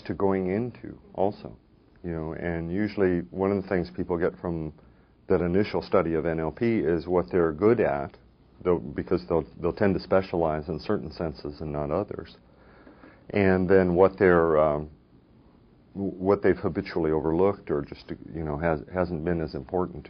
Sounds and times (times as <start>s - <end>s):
Speech: 0.0s - 12.4s, 13.3s - 15.0s, 15.9s - 20.0s.